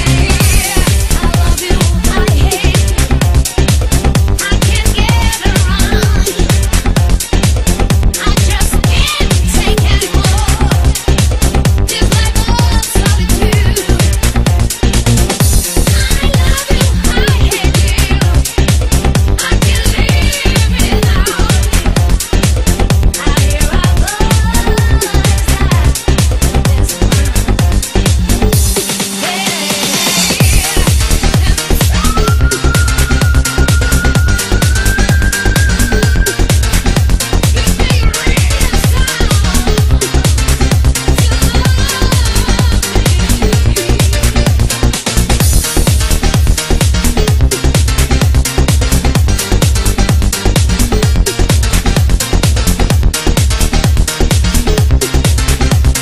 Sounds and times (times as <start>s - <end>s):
Dance music: 0.0s - 56.0s
Electronic music: 0.0s - 56.0s.